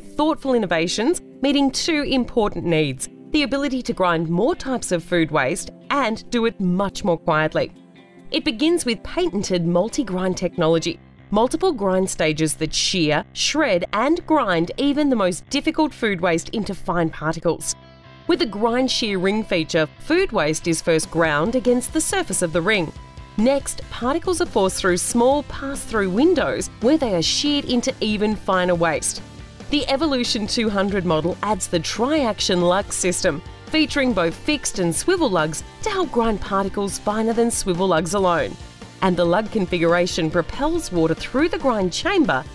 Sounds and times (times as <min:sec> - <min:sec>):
Speech: 0:00.0 - 0:07.7, 0:08.4 - 0:42.5
Music: 0:00.0 - 0:42.5.